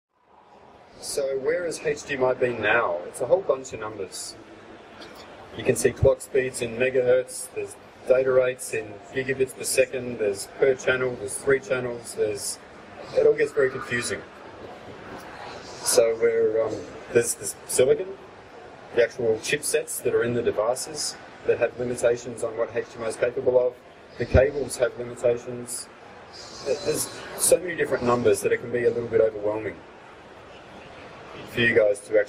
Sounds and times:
Speech: 0.9s - 18.3s, 18.9s - 29.8s, 31.3s - 32.2s.

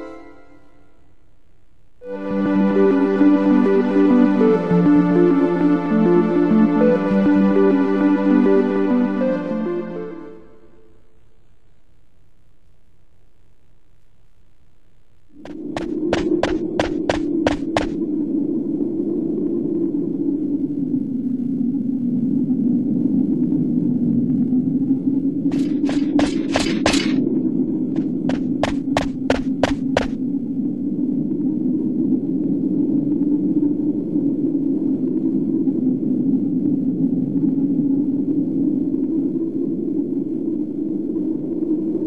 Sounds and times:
Run: 15.4s - 18.0s, 28.0s - 30.2s.

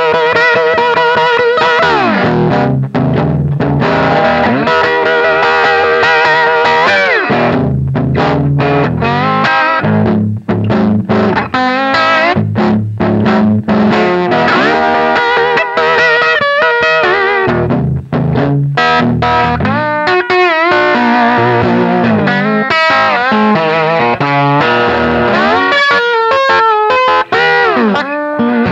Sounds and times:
Bass guitar: 0.0s - 28.7s
Electric guitar: 0.0s - 28.7s
Strum: 0.0s - 28.7s.

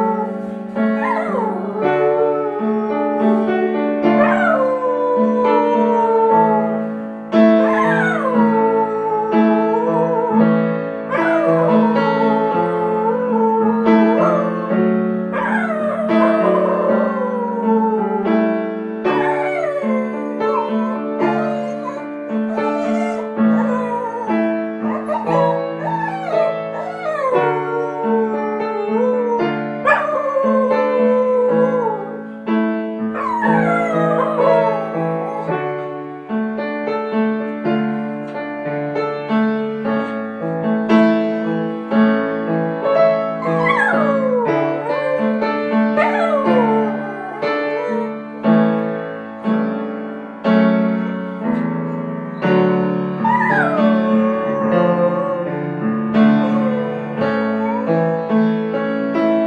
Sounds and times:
Whimper (dog): 0.0s - 3.6s, 4.2s - 6.7s, 7.6s - 10.4s, 11.1s - 18.4s, 19.1s - 32.3s, 33.2s - 35.6s, 43.4s - 48.2s, 53.2s - 58.4s
Music: 0.0s - 59.4s.

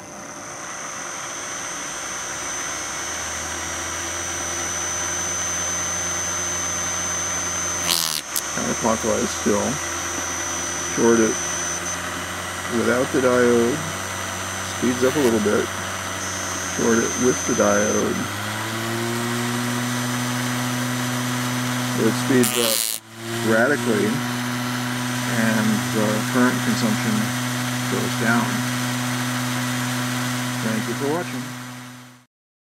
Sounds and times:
Drill: 0.0s - 32.3s
Speech: 8.5s - 9.8s, 10.9s - 11.4s, 12.7s - 13.9s, 14.7s - 15.7s, 16.8s - 18.3s, 22.0s - 24.3s, 25.3s - 27.3s, 27.9s - 28.7s, 30.6s - 31.5s.

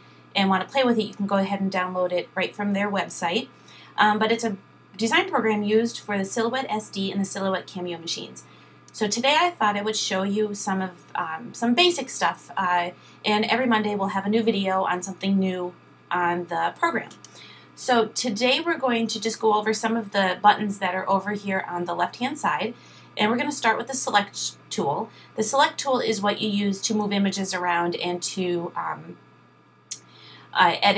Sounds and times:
Speech: 0.4s - 29.2s, 29.9s - 30.9s.

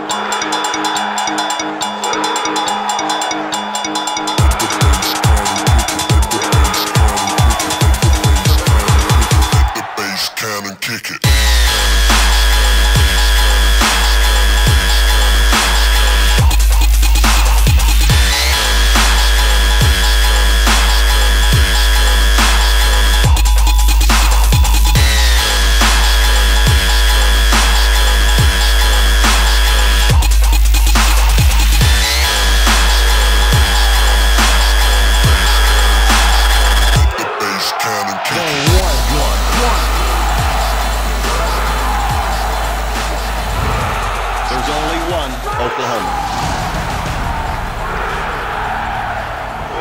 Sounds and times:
Dubstep: 0.0s - 48.5s.

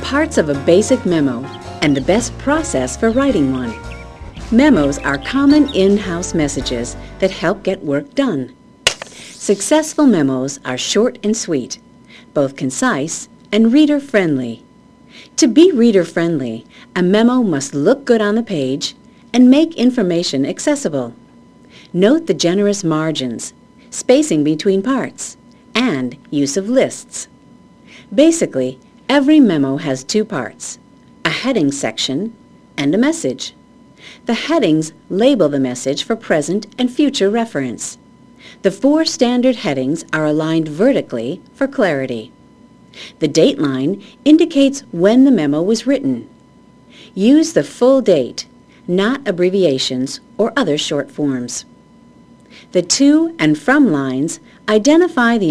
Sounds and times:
Speech: 0.0s - 3.8s, 4.5s - 8.6s, 9.4s - 11.8s, 12.4s - 14.7s, 15.4s - 21.2s, 21.9s - 27.4s, 28.1s - 33.6s, 34.3s - 38.0s, 38.6s - 42.4s, 43.2s - 46.3s, 47.1s - 51.7s, 52.7s - 55.5s.

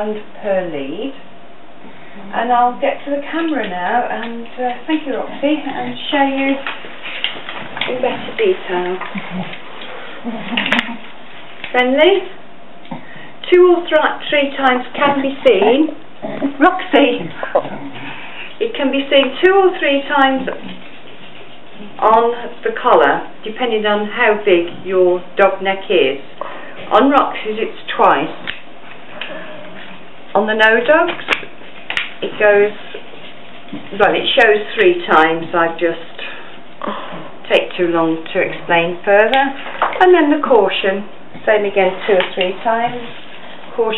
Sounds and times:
Speech: 0.0s - 1.2s, 2.2s - 6.7s, 7.8s - 9.1s, 11.7s - 12.4s, 13.4s - 17.9s, 18.6s - 20.7s, 21.8s - 26.3s, 26.9s - 28.4s, 30.4s - 31.2s, 32.2s - 33.0s, 33.9s - 36.3s, 36.9s - 43.9s.

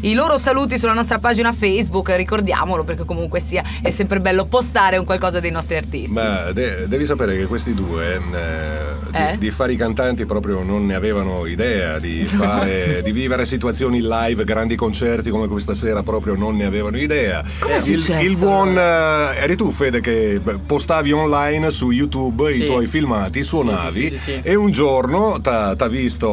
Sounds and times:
Speech: 0.0s - 26.3s.

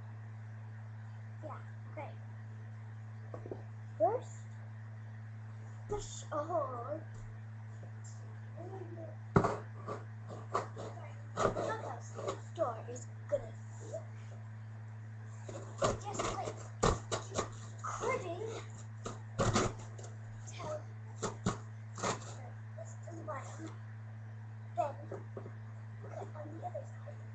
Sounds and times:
Speech: 1.4s - 2.2s, 4.0s - 4.4s, 5.9s - 7.1s, 8.6s - 9.2s, 10.9s - 14.0s, 15.9s - 16.6s, 17.9s - 18.7s, 20.5s - 20.9s, 22.2s - 23.7s, 24.8s - 25.2s, 26.1s - 27.3s.

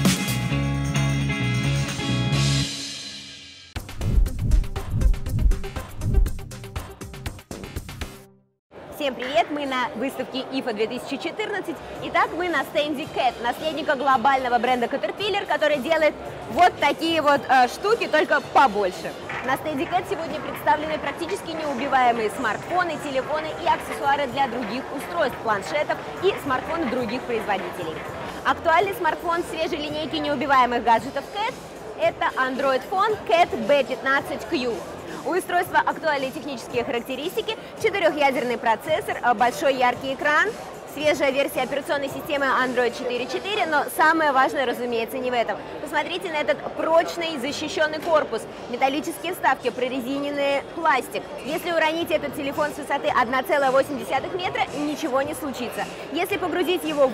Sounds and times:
Speech: 8.9s - 57.1s.

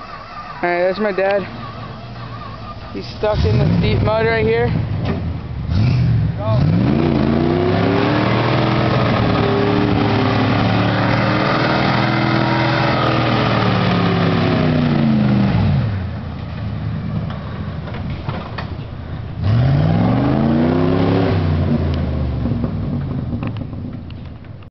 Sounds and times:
Truck: 0.0s - 24.7s.

